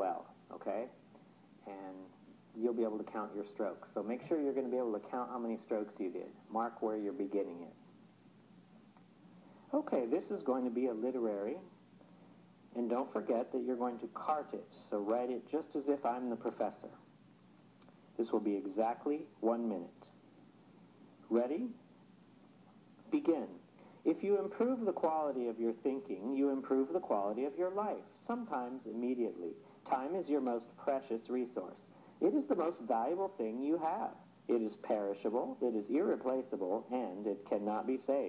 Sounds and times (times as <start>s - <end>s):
Speech: 0.0s - 1.0s, 1.6s - 8.0s, 9.7s - 11.8s, 12.7s - 17.1s, 18.2s - 20.2s, 21.3s - 21.8s, 23.1s - 38.2s.